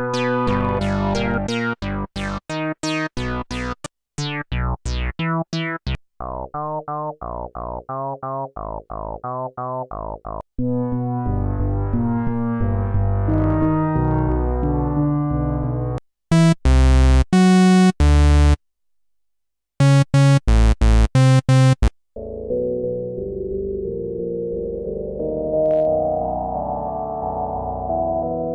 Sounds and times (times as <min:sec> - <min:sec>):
Synthesizer: 0:00.0 - 0:18.6, 0:19.8 - 0:28.5.